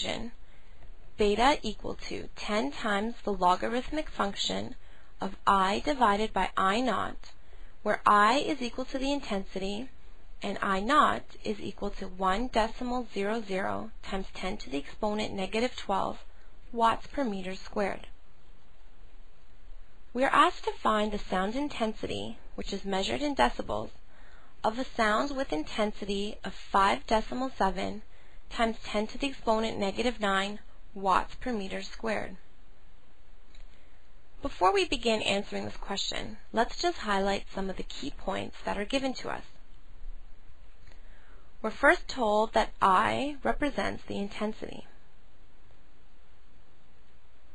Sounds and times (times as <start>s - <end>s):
Speech: 0.0s - 0.4s, 1.2s - 7.3s, 7.9s - 18.1s, 20.2s - 24.0s, 24.6s - 32.4s, 34.4s - 39.5s, 41.6s - 45.0s.